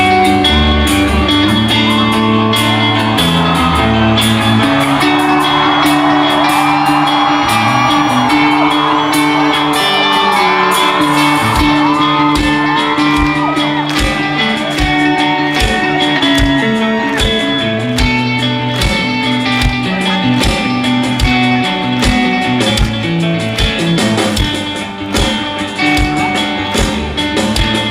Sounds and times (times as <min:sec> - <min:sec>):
Music: 0:00.0 - 0:27.9.